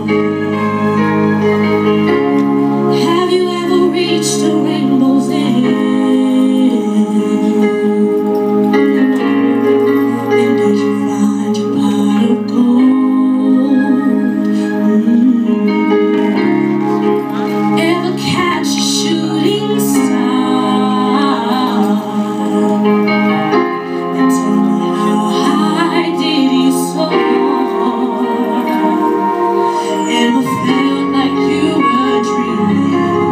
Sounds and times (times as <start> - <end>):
Music: 0.0 - 33.3
Female singing: 2.9 - 9.1, 10.2 - 16.6, 17.7 - 33.3.